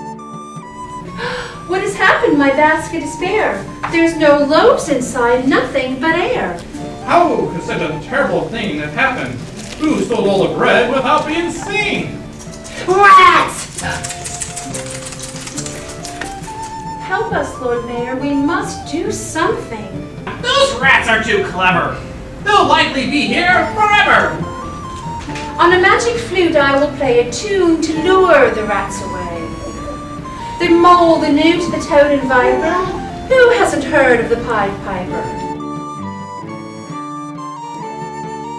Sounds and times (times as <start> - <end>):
Music: 0.0 - 38.5.